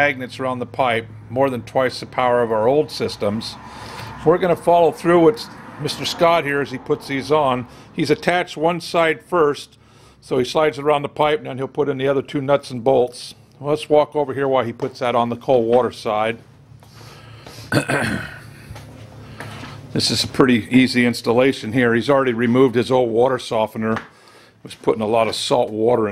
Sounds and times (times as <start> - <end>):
Speech: 0.0 - 3.6, 4.2 - 16.4, 19.9 - 26.1.